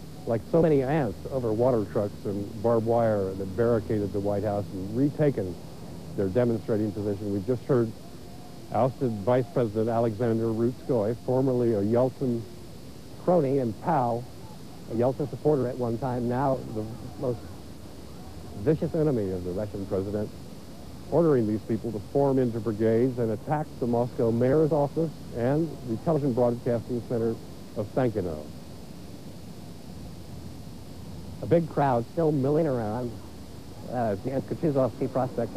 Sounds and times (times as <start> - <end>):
Narration, monologue: 0.0 - 35.5
Male speech, man speaking: 0.3 - 5.6, 6.2 - 8.0, 8.7 - 12.4, 13.2 - 14.3, 14.9 - 17.5, 18.6 - 20.3, 21.1 - 28.5, 31.4 - 33.2, 33.9 - 35.5.